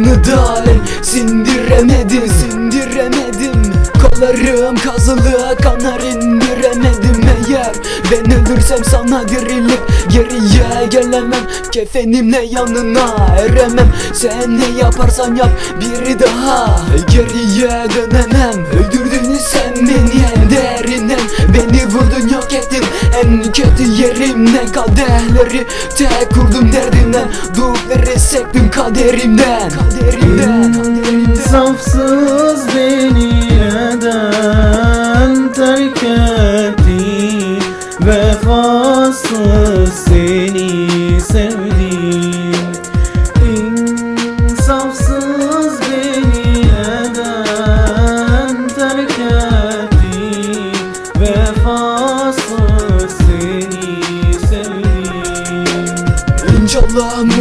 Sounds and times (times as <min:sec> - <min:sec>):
Middle Eastern music: 0:00.0 - 0:57.4.